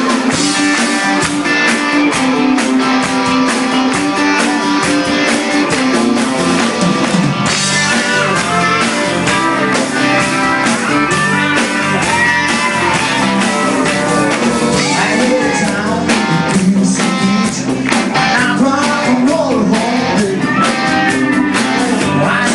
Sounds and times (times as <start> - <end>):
Independent music: 0.0 - 22.5.